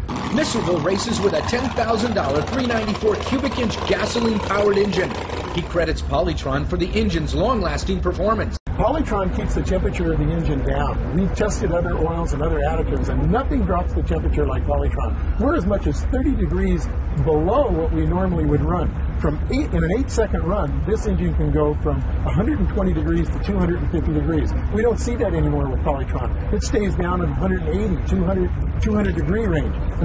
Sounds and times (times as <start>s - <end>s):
Idling: 0.0s - 30.0s
Medium engine (mid frequency): 0.0s - 30.0s
Vehicle: 0.0s - 30.0s
Speech: 0.3s - 30.0s.